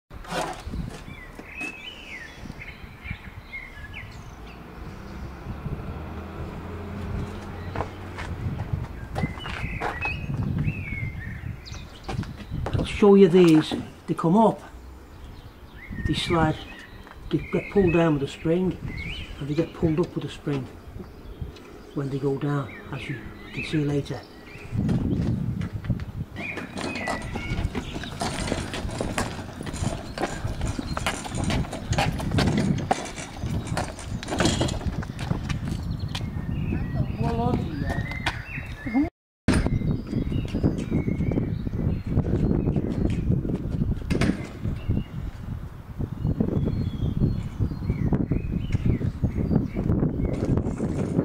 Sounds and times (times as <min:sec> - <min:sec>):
Chirp, tweet: 0:00.4 - 0:05.8, 0:07.2 - 0:14.1, 0:14.8 - 0:25.4, 0:26.4 - 0:51.2.